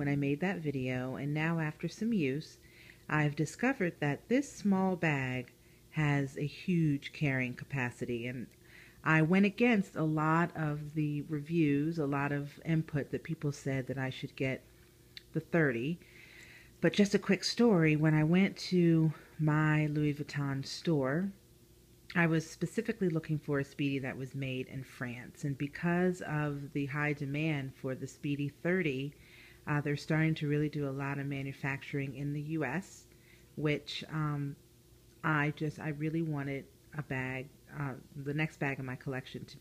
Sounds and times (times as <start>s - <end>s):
Speech: 0.0s - 14.6s, 15.2s - 16.0s, 16.8s - 21.4s, 22.1s - 34.6s, 35.2s - 39.6s.